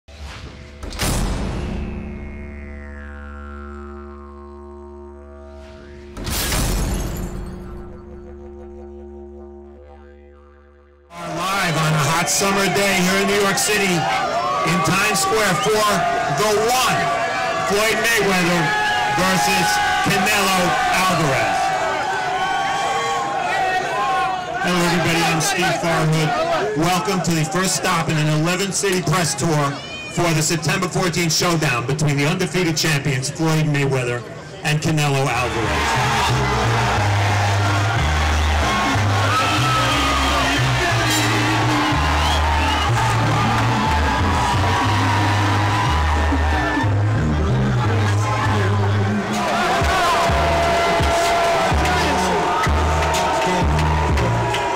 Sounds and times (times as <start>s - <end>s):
Didgeridoo: 0.4s - 13.7s, 35.4s - 54.7s.